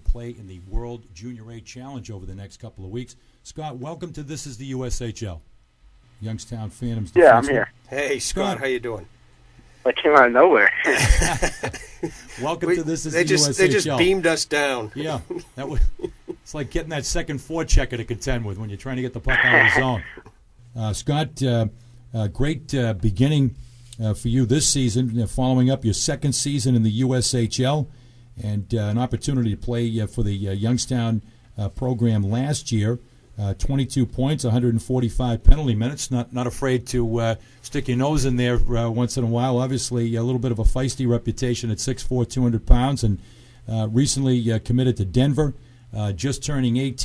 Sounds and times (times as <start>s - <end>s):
Speech: 0.0s - 5.4s, 6.2s - 9.1s, 9.9s - 11.1s, 12.4s - 15.9s, 16.5s - 47.0s.